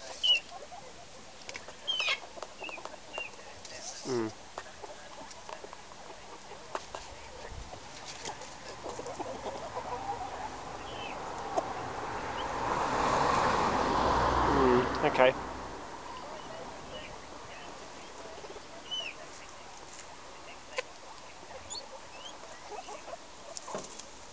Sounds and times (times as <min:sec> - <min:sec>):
Bird: 0:00.0 - 0:11.7, 0:16.1 - 0:24.1
Chicken, rooster: 0:00.0 - 0:11.8, 0:16.1 - 0:24.1
Speech: 0:14.5 - 0:15.4.